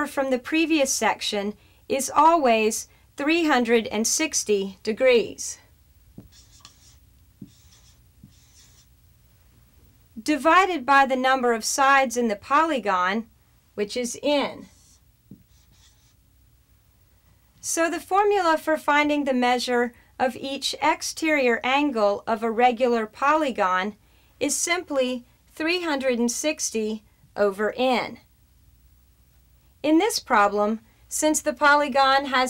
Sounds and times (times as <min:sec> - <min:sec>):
Speech: 0:00.0 - 0:05.7, 0:10.2 - 0:14.8, 0:17.6 - 0:28.3, 0:29.8 - 0:32.4
Writing: 0:06.2 - 0:09.0, 0:14.6 - 0:16.2.